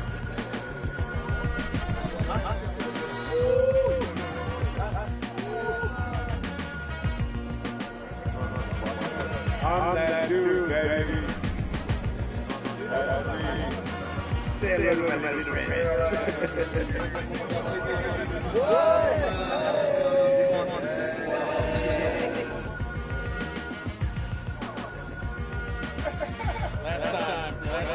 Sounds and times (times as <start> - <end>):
Music: 0.0 - 27.9
Speech: 14.6 - 16.3.